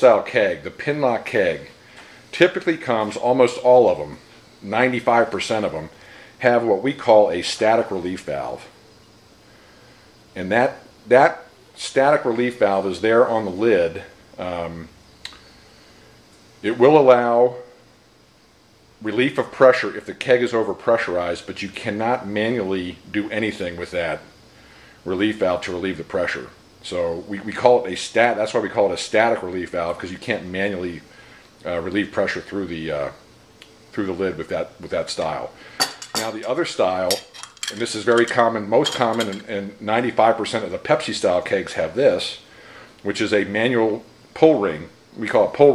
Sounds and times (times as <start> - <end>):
Speech: 0.0 - 8.8, 10.4 - 14.9, 16.6 - 17.7, 19.0 - 24.3, 25.0 - 33.2, 33.9 - 35.6, 36.2 - 42.4, 43.0 - 45.7.